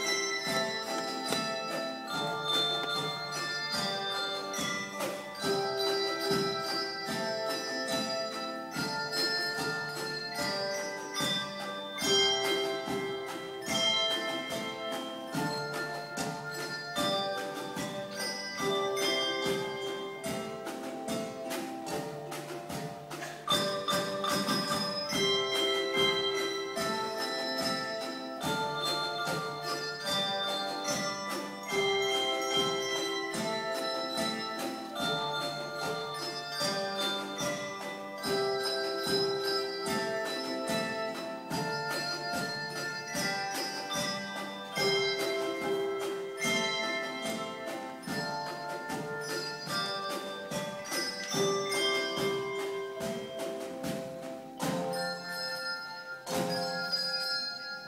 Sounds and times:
Jingle bell: 0.0 - 57.8.

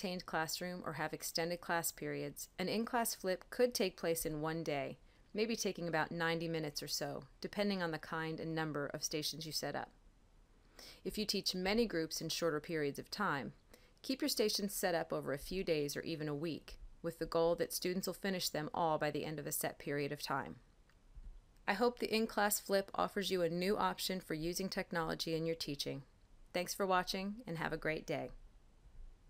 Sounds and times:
Speech: 0.0 - 9.9, 11.1 - 20.6, 21.7 - 26.0, 26.6 - 28.4.

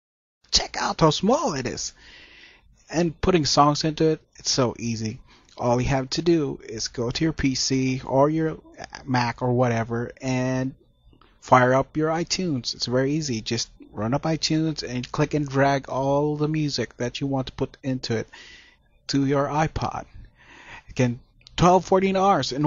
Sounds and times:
Speech: 0.5 - 2.0, 2.9 - 10.8, 11.4 - 18.3, 19.1 - 20.2, 20.8 - 22.6.

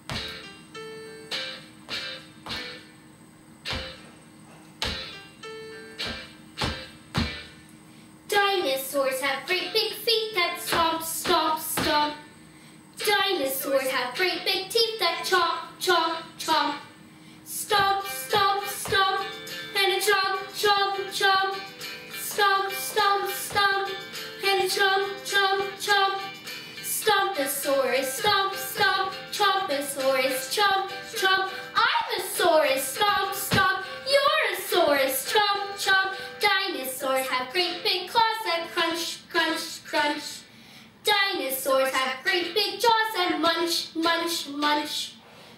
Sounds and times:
Music: 0.0 - 12.4, 13.0 - 40.4.

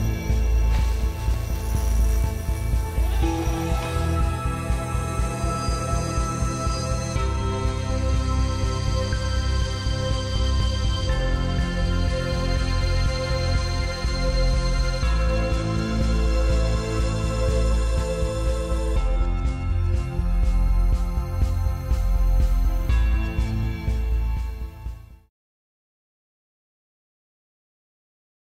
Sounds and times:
Background music: 0.0 - 25.3.

